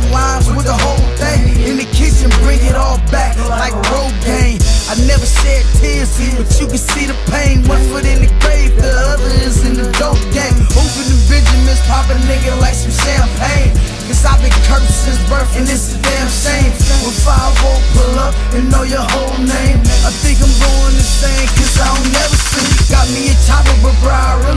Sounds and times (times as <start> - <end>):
Music: 0.0 - 24.5.